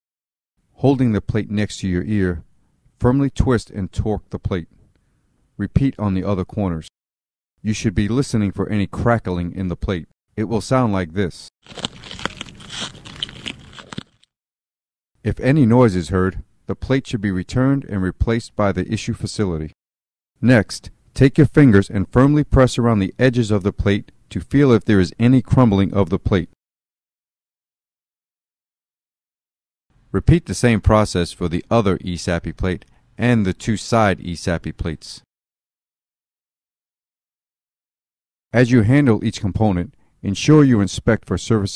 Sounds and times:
Speech: 0.8s - 4.8s, 5.6s - 6.9s, 7.6s - 11.5s, 15.2s - 19.8s, 20.4s - 26.6s, 30.1s - 35.3s, 38.5s - 41.7s.

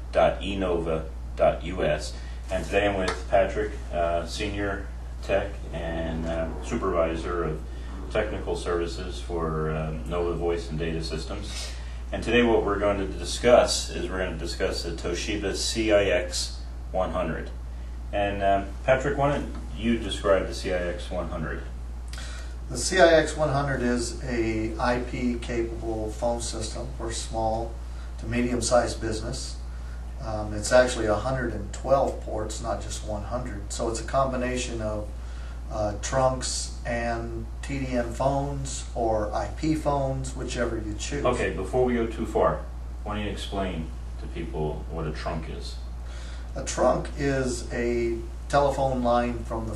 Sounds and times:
Speech: 0.0s - 21.8s, 22.7s - 45.9s, 46.5s - 49.7s.

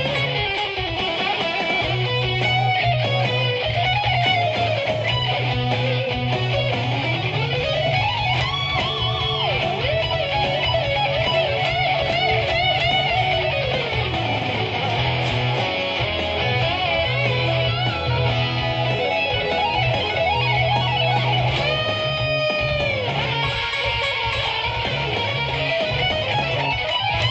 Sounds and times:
Bass guitar: 0.0s - 27.3s
Strum: 0.0s - 27.3s.

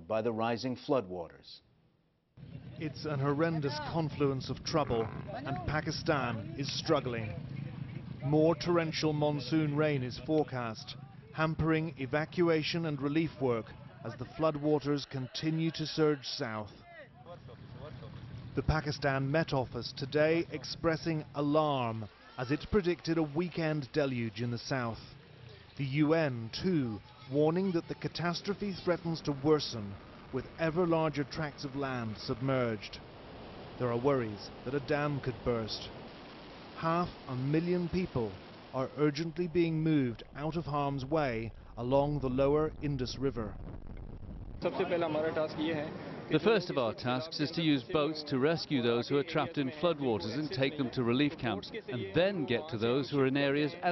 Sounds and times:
Speech: 0.0s - 1.6s, 2.8s - 18.0s, 18.6s - 25.1s, 25.7s - 33.0s, 33.8s - 35.9s, 36.8s - 43.6s, 44.6s - 53.9s.

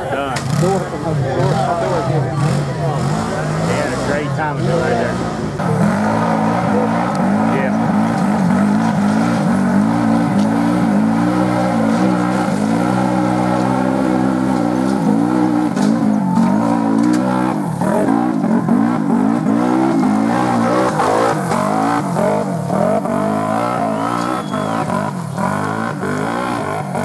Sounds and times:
Speech: 0.0s - 5.4s, 6.2s - 7.9s
Race car, auto racing: 0.0s - 27.0s.

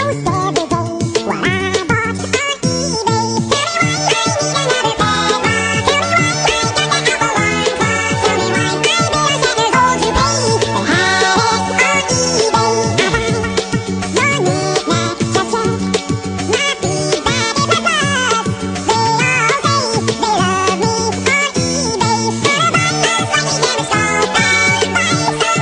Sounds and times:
Music: 0.0s - 25.6s.

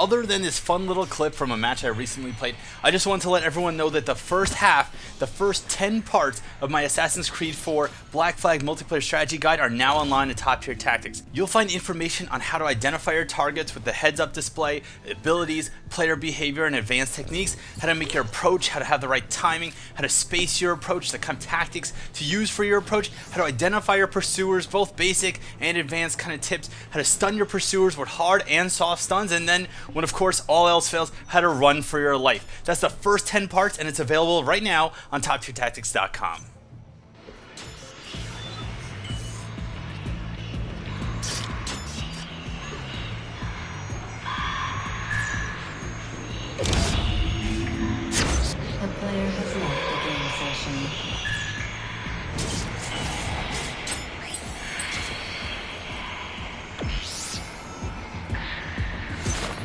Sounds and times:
Speech: 0.0s - 36.5s, 48.8s - 51.0s.

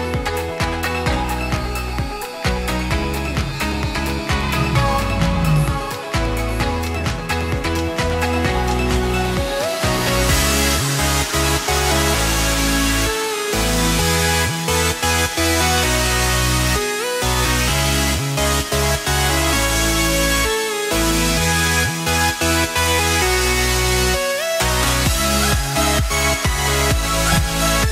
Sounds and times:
Music: 0.0s - 27.9s.

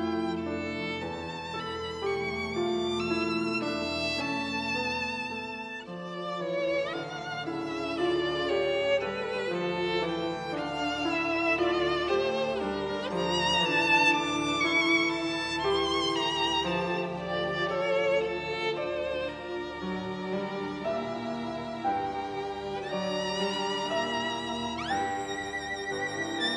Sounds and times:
Orchestra: 0.0s - 26.5s
Violin, fiddle: 0.0s - 26.5s.

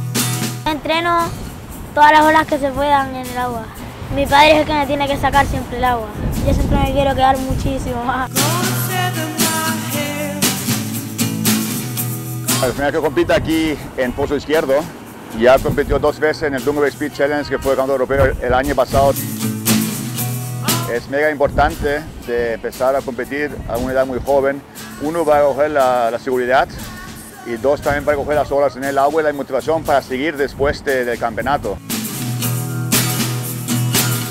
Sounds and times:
Music: 0.0s - 34.3s
Speech: 2.0s - 8.3s, 12.6s - 19.2s, 20.7s - 26.8s, 27.5s - 31.8s.

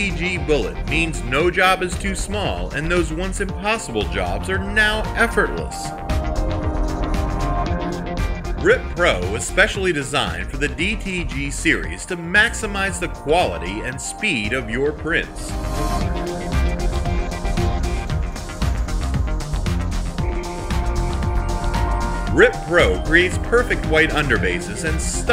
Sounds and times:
Speech: 0.0s - 5.9s, 8.6s - 15.5s, 22.3s - 25.3s
Music: 0.0s - 25.3s.

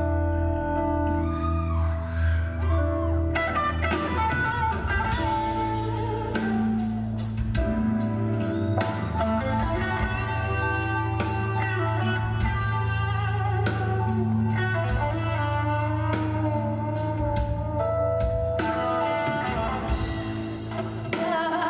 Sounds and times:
Music: 0.0s - 21.6s.

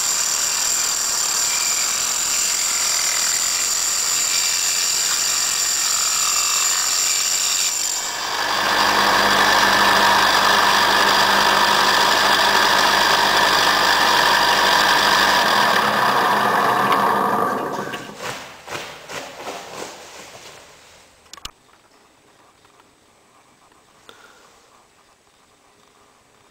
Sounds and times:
Power tool: 0.0s - 18.3s
Wood: 0.5s - 18.9s.

